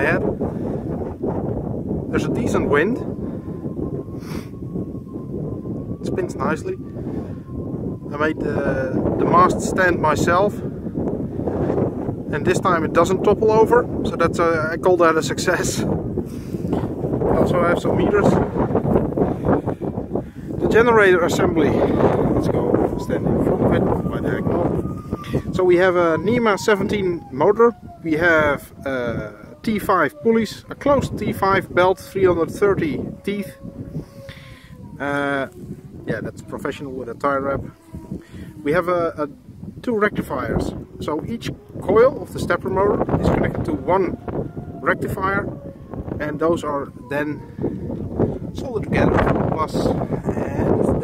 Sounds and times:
Speech: 0:00.0 - 0:00.3, 0:02.1 - 0:03.1, 0:06.1 - 0:06.8, 0:08.1 - 0:10.6, 0:12.3 - 0:15.9, 0:17.4 - 0:18.4, 0:20.6 - 0:24.7, 0:25.5 - 0:33.6, 0:35.0 - 0:37.7, 0:38.6 - 0:44.2, 0:44.8 - 0:45.5, 0:46.2 - 0:47.4, 0:48.6 - 0:51.0
Wind noise (microphone): 0:00.0 - 0:51.0.

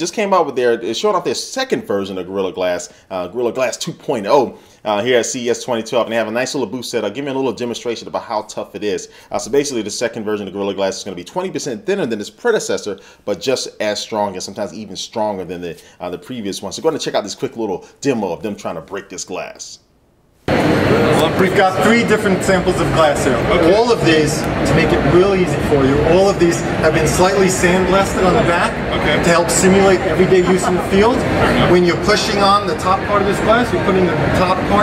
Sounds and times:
Speech: 0:00.0 - 0:19.8, 0:20.9 - 0:34.8.

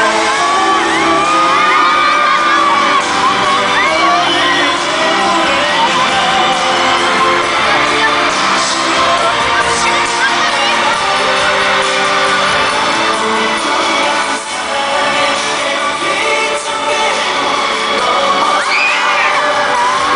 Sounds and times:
Music: 0:00.0 - 0:20.1
Speech: 0:02.8 - 0:11.9.

